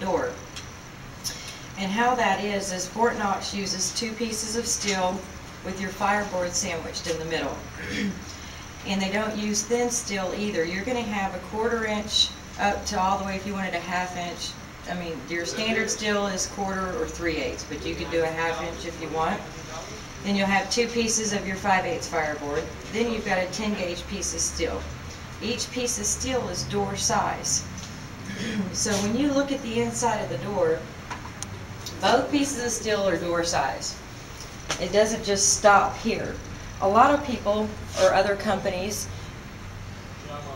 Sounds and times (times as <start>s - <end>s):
Speech: 8.9s - 27.6s.